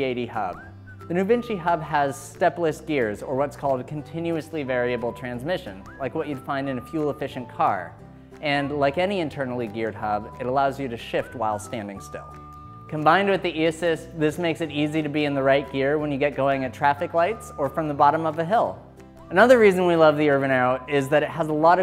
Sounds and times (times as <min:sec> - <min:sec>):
Speech: 0:00.0 - 0:12.3, 0:12.9 - 0:21.8
Music: 0:00.0 - 0:21.8.